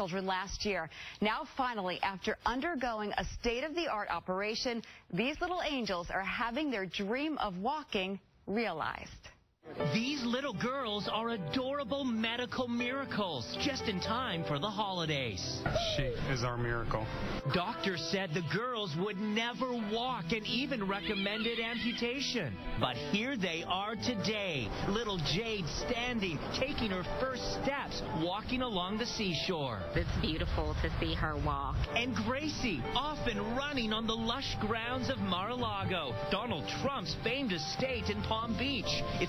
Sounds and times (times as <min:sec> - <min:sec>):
Music: 0:09.6 - 0:39.2.